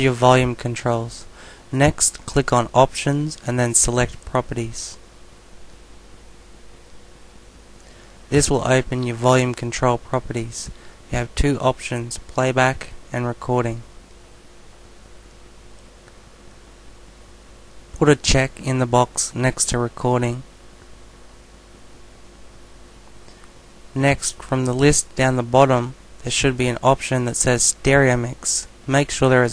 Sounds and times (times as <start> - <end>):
Speech: 0.0 - 5.0, 8.3 - 13.9, 18.0 - 20.5, 24.0 - 29.5.